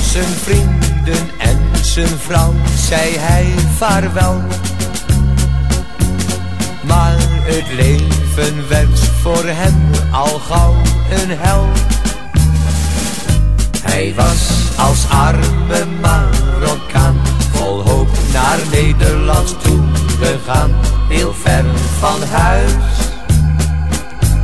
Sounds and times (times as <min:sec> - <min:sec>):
Exciting music: 0:00.0 - 0:24.4.